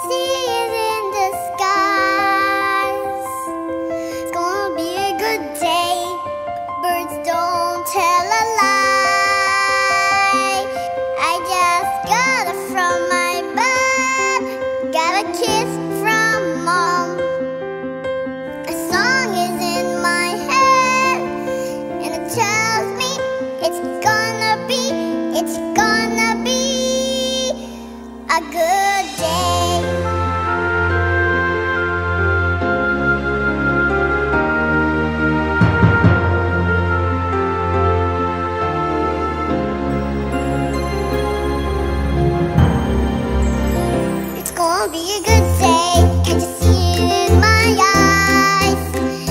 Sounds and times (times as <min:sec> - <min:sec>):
Tender music: 0:00.0 - 0:49.3.